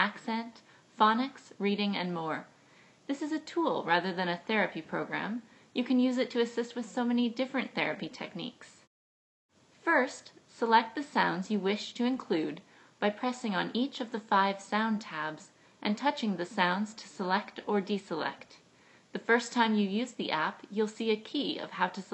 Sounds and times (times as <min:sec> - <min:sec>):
Female speech, woman speaking: 0:00.0 - 0:02.5, 0:03.1 - 0:08.9, 0:09.9 - 0:18.6, 0:19.2 - 0:22.1.